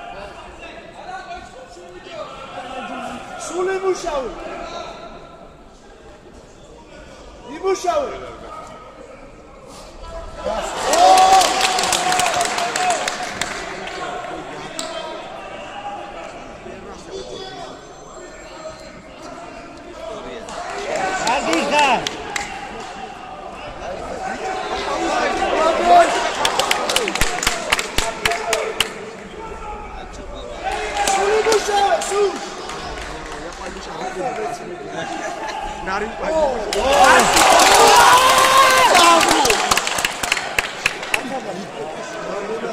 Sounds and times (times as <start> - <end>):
Speech: 12.2 - 37.6.